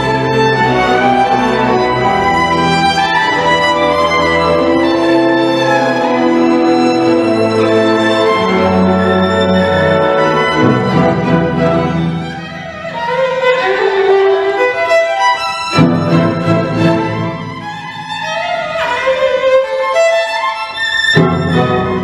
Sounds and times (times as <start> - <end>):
Violin, fiddle: 0.0 - 22.0.